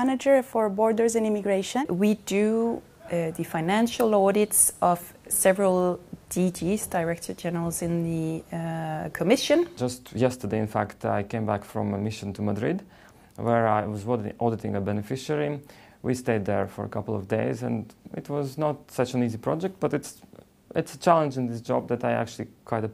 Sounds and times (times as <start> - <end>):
Speech: 0.0 - 12.8.